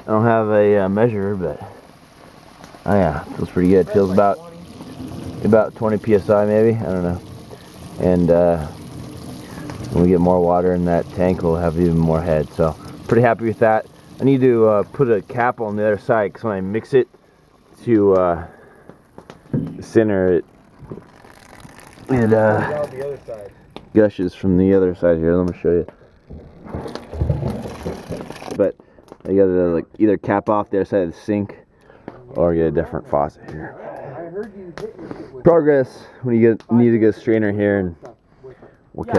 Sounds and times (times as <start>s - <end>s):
Rain: 0.0s - 25.7s, 26.3s - 28.7s.